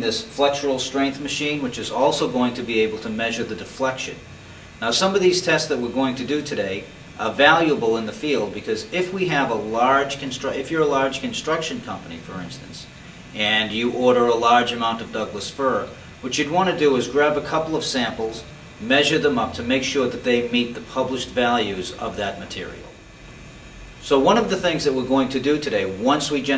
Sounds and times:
Speech: 0.0s - 23.0s, 24.0s - 26.5s.

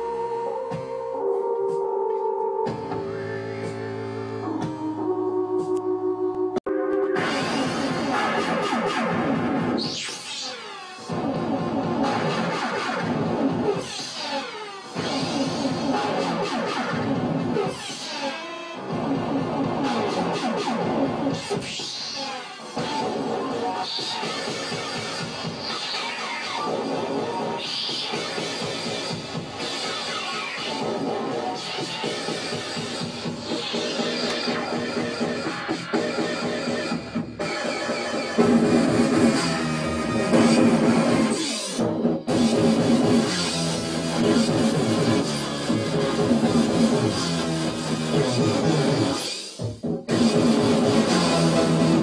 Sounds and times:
Music: 0.0s - 52.0s.

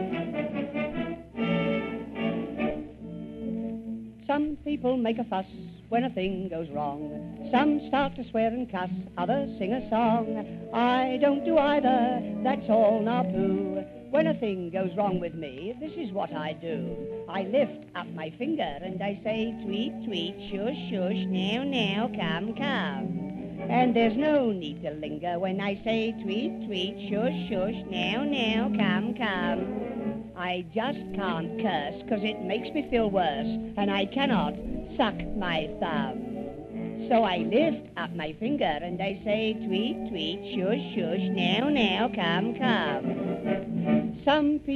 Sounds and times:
Music: 0.0s - 44.7s
Speech: 4.3s - 13.4s, 14.1s - 23.1s, 23.7s - 29.6s, 30.4s - 36.2s, 37.0s - 43.0s, 44.2s - 44.7s.

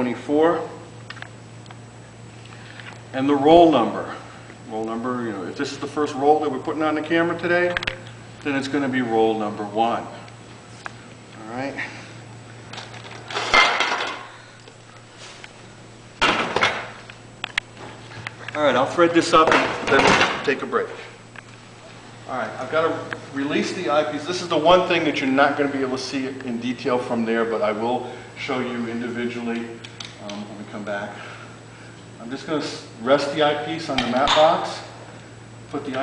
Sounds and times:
Speech: 0.0s - 0.8s, 3.1s - 10.2s, 18.6s - 21.1s, 22.3s - 31.2s, 32.2s - 34.9s, 35.7s - 36.0s.

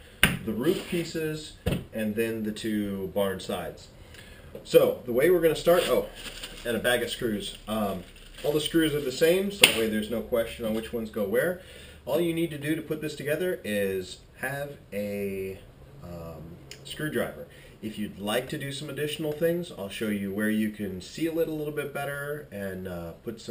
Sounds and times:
Speech: 0.4s - 3.9s, 4.6s - 23.5s.

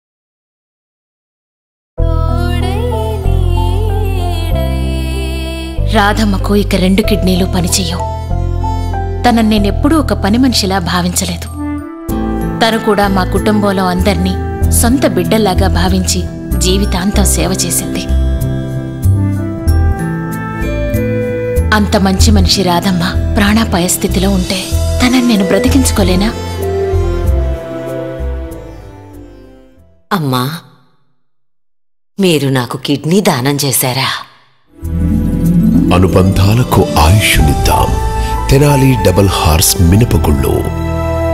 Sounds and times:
Music: 2.0s - 30.2s, 34.7s - 41.3s
Speech: 35.9s - 40.7s.

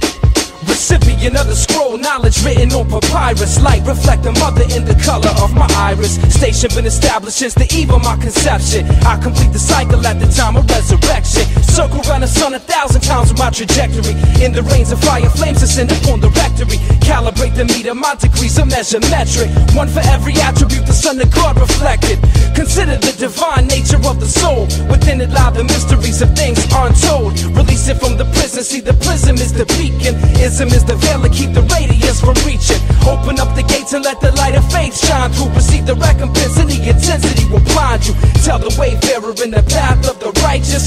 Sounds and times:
Music: 0.0s - 40.8s.

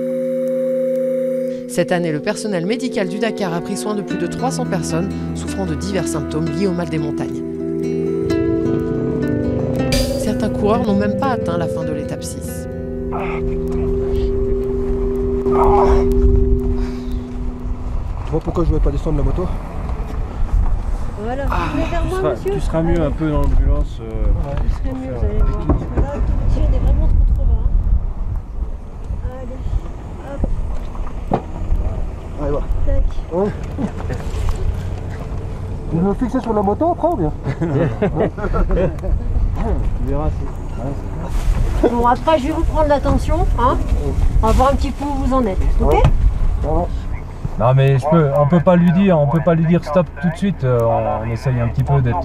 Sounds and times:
Music: 1.5s - 18.5s.

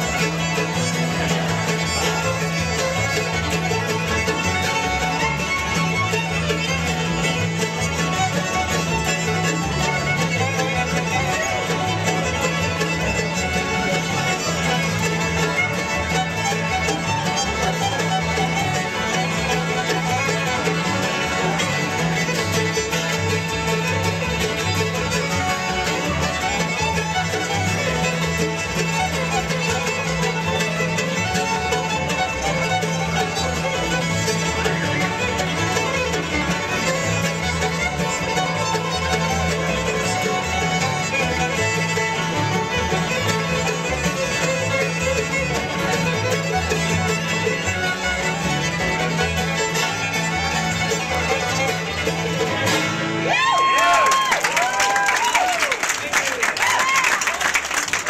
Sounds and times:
Violin, fiddle: 0.0s - 57.0s
Banjo: 0.0s - 58.0s
Guitar: 0.0s - 58.0s
Speech: 55.7s - 57.6s.

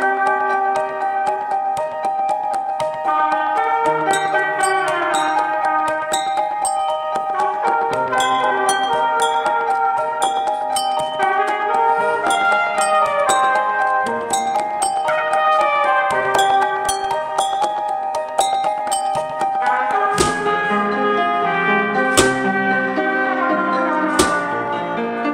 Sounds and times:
Trumpet: 0.0s - 1.6s, 3.0s - 18.2s, 18.9s - 25.3s.

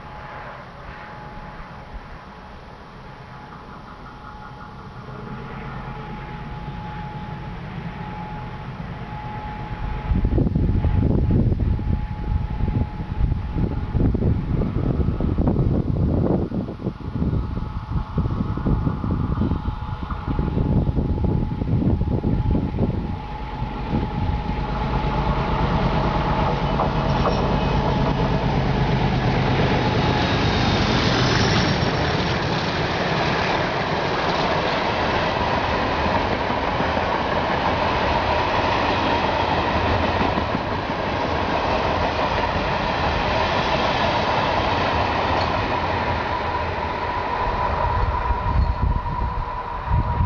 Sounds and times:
Railroad car, train wagon: 0.0s - 50.2s
Train: 0.0s - 50.2s
Clickety-clack: 26.4s - 28.4s, 30.4s - 42.8s, 43.9s - 45.8s.

